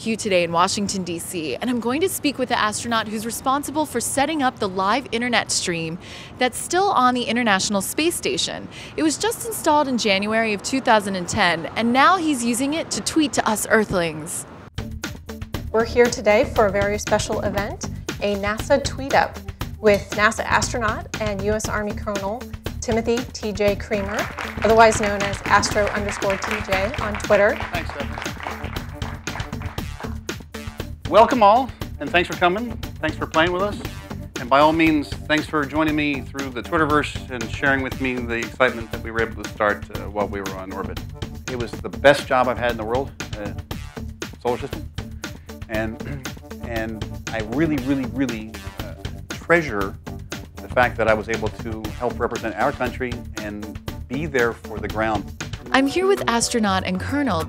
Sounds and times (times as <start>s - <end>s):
Music: 14.7s - 57.4s
Speech: 31.1s - 33.8s, 34.4s - 43.6s, 44.4s - 44.8s, 45.7s - 50.0s, 50.7s - 55.2s.